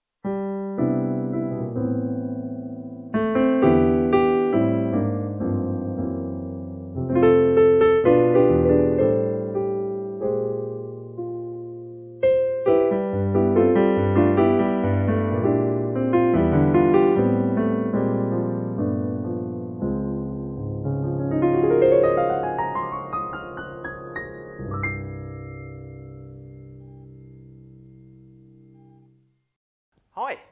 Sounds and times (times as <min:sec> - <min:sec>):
Music: 0:00.2 - 0:29.6.